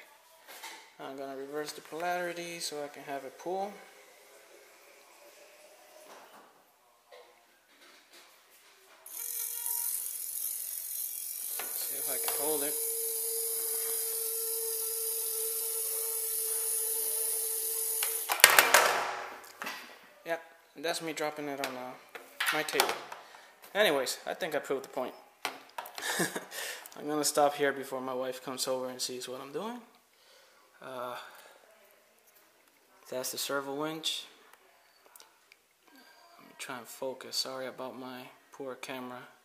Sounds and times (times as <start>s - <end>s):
Inside, small room: 0.0s - 39.4s.